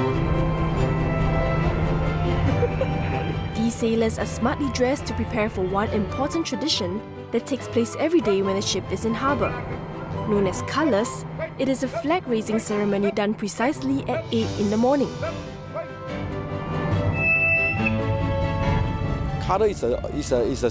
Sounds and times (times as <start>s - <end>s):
Music: 0.0s - 20.7s
Speech: 19.4s - 20.7s.